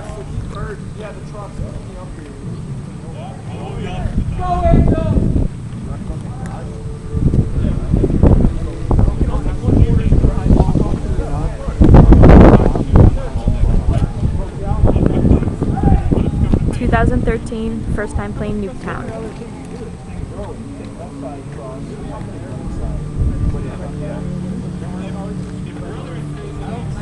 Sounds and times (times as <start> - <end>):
Music: 0.0 - 27.0
Speech: 16.7 - 19.6.